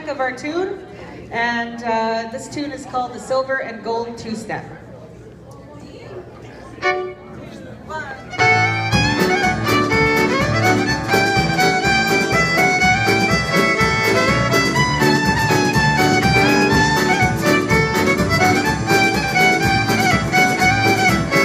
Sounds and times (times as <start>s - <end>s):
Violin, fiddle: 8.2s - 21.4s.